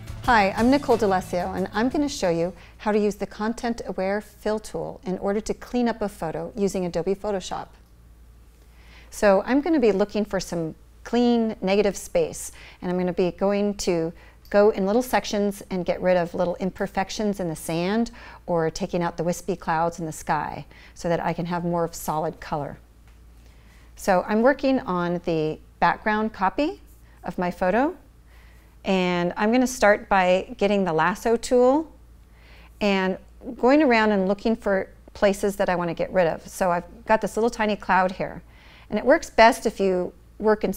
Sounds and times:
Speech: 0:00.3 - 0:07.8, 0:09.1 - 0:22.8, 0:24.0 - 0:28.0, 0:28.9 - 0:32.0, 0:32.8 - 0:40.7.

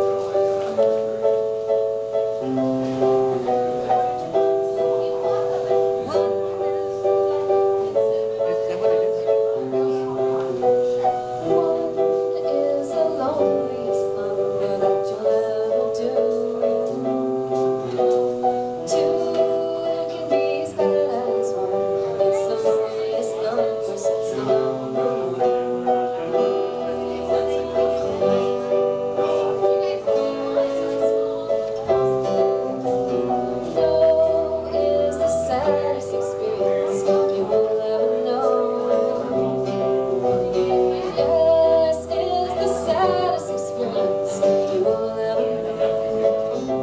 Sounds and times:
Music: 0:00.0 - 0:46.8
Speech: 0:02.9 - 0:46.8.

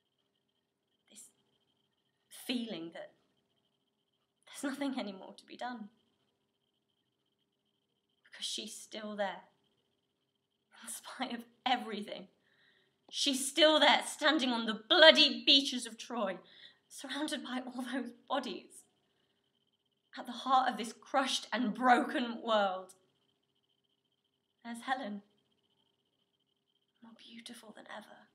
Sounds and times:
Narration, monologue: 0:01.0 - 0:28.3.

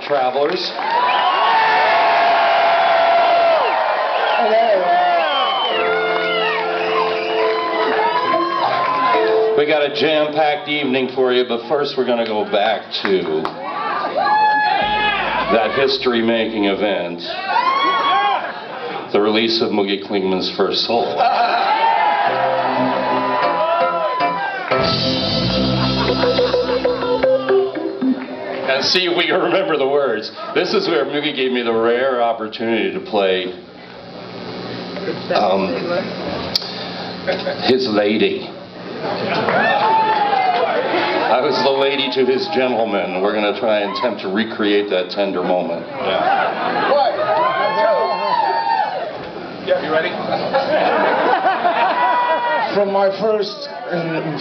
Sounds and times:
Speech: 0:00.0 - 0:00.8, 0:09.6 - 0:13.6, 0:19.1 - 0:21.4, 0:28.7 - 0:33.6, 0:41.3 - 0:46.1, 0:52.7 - 0:54.4
Music: 0:05.7 - 0:10.1, 0:22.3 - 0:28.9.

